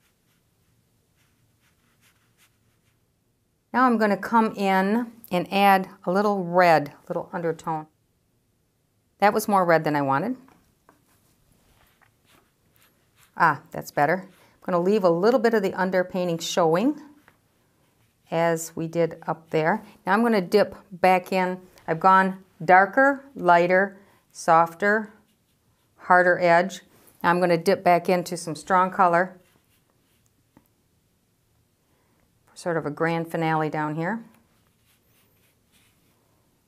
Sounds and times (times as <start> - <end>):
Inside, small room: 0.0 - 36.6
Speech: 3.8 - 7.9, 9.2 - 10.5, 13.4 - 17.2, 18.3 - 25.2, 26.0 - 29.4, 32.6 - 34.3.